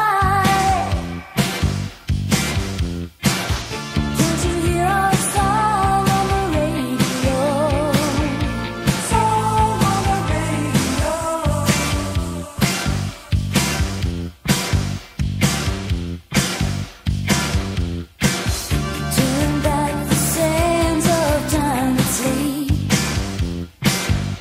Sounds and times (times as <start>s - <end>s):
Music: 0.0s - 24.4s.